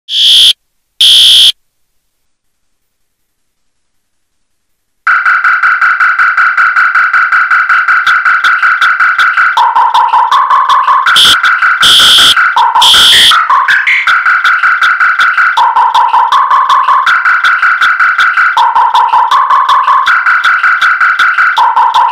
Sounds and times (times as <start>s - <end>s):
Fire alarm: 0.1s - 1.6s, 11.1s - 13.4s
Music: 5.1s - 22.1s.